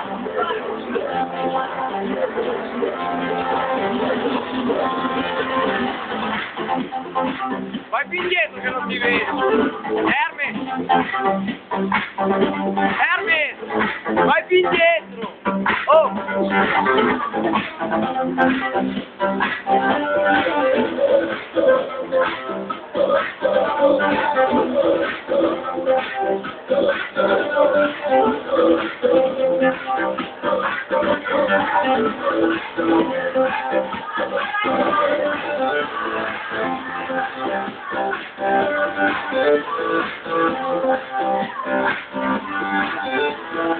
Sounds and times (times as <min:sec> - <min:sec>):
Music: 0:00.0 - 0:43.7
Speech: 0:07.9 - 0:09.4, 0:10.1 - 0:10.6, 0:12.9 - 0:13.6, 0:14.2 - 0:15.3, 0:15.9 - 0:16.2.